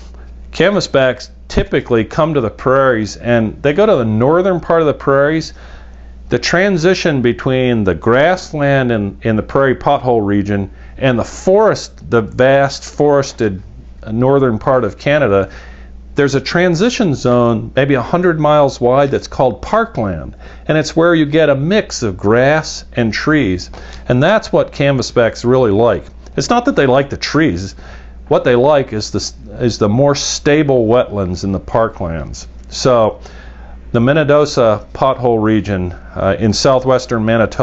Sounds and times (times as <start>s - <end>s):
Speech: 0.5s - 5.6s, 6.3s - 15.5s, 16.2s - 33.2s, 33.9s - 37.6s.